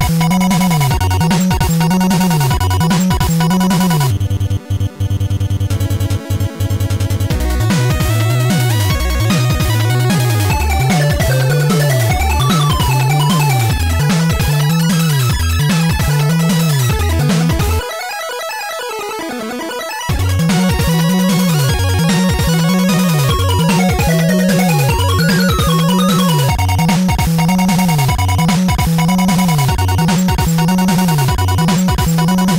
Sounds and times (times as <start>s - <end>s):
Video game music: 0.0s - 32.5s.